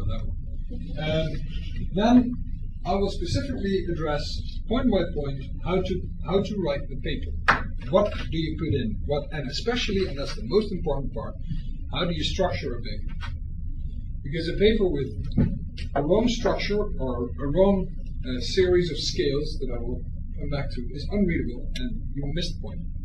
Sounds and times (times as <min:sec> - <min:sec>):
Speech: 0:00.0 - 0:13.4, 0:14.2 - 0:23.0.